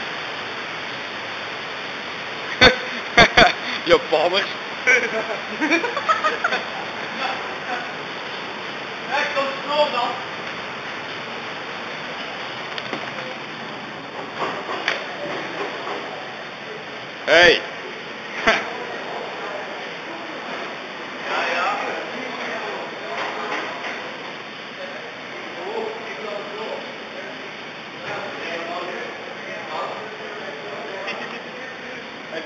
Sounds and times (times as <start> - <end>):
Speech: 9.1 - 10.2, 24.8 - 32.4.